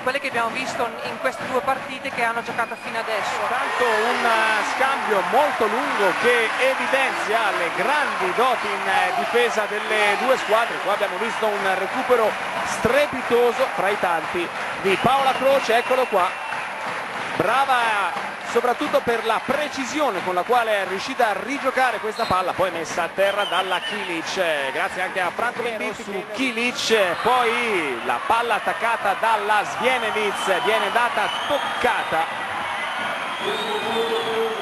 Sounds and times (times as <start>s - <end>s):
Speech: 0.0s - 16.3s, 17.4s - 32.3s.